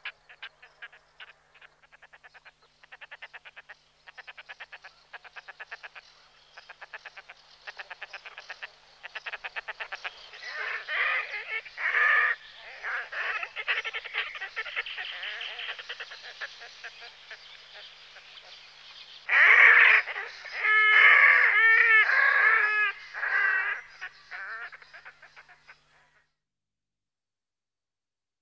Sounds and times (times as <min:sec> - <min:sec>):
Bird: 0:00.0 - 0:26.4.